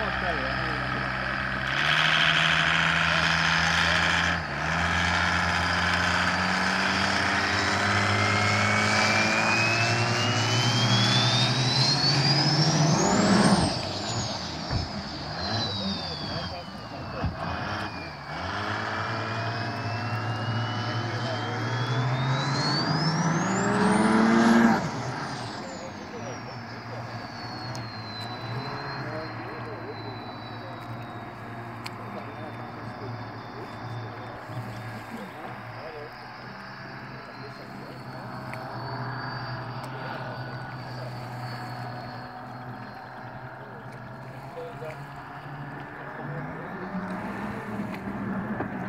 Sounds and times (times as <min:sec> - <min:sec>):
Speech: 0:00.0 - 0:01.6, 0:02.9 - 0:04.2, 0:15.4 - 0:18.2, 0:20.8 - 0:22.0, 0:25.4 - 0:38.2, 0:43.6 - 0:45.1, 0:45.8 - 0:48.0
Motorboat, speedboat: 0:00.0 - 0:48.8.